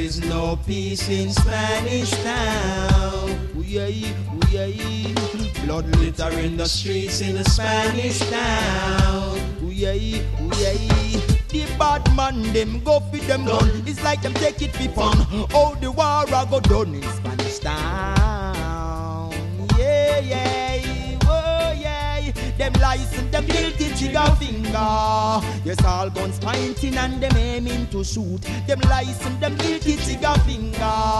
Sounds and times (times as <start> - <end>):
Reggae: 0.0 - 31.1.